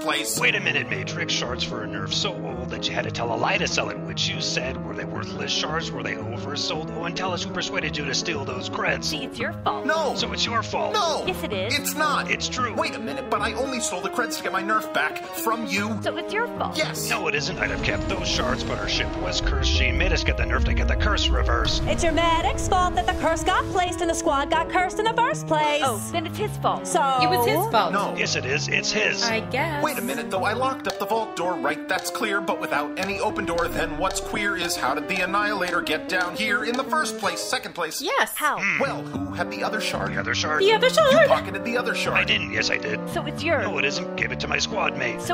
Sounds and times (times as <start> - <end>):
Speech: 0.0 - 23.8, 25.1 - 45.3
Music: 0.0 - 45.3.